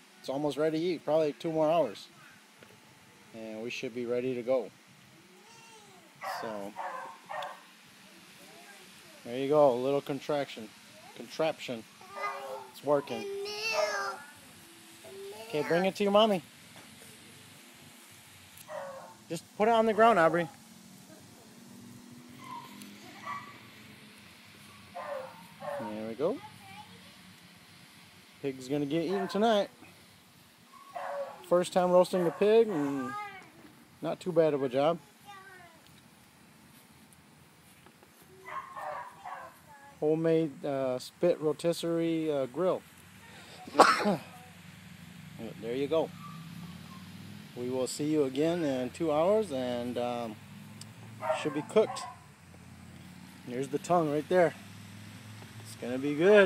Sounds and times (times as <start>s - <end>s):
Speech: 28.4s - 29.7s.